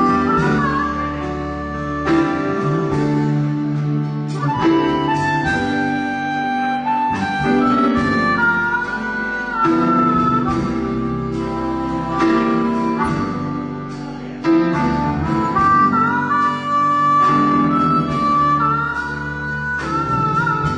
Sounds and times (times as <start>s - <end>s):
Harmonica: 0.0s - 20.7s
Wind instrument, woodwind instrument: 0.0s - 20.7s.